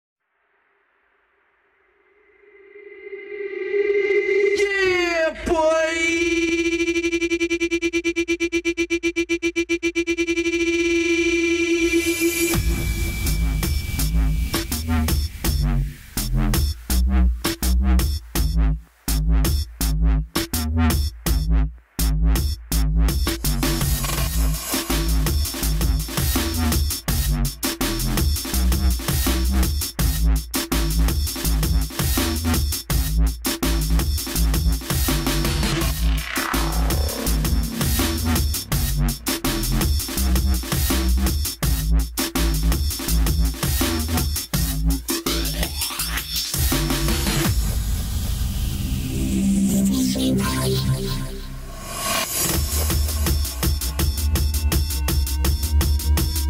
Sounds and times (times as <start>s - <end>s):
Electronic music: 2.2s - 56.4s.